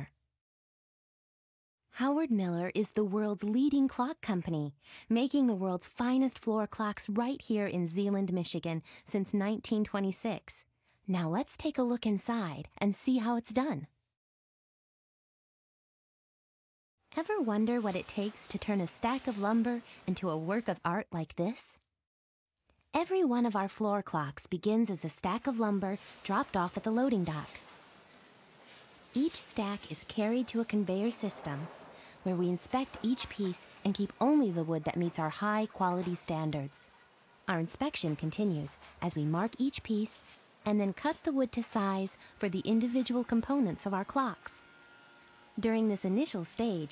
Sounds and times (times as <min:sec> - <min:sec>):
Speech: 0:02.0 - 0:13.9, 0:17.2 - 0:21.8, 0:23.0 - 0:27.6, 0:29.2 - 0:36.9, 0:37.5 - 0:44.7, 0:45.6 - 0:46.9.